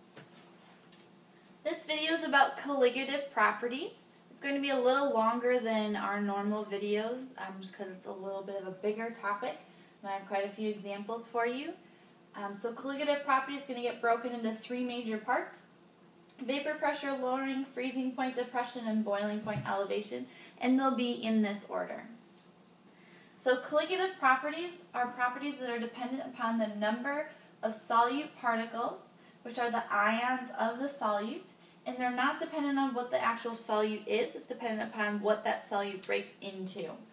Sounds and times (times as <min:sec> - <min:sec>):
Speech: 0:01.7 - 0:11.8, 0:12.4 - 0:15.7, 0:16.3 - 0:22.2, 0:23.4 - 0:37.1.